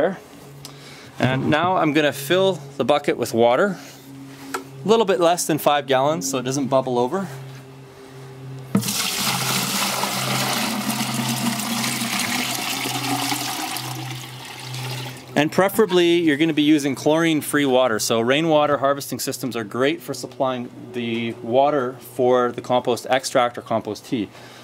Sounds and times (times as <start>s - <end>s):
Speech: 0.0s - 0.2s, 1.2s - 3.8s, 4.8s - 7.4s, 15.4s - 24.4s.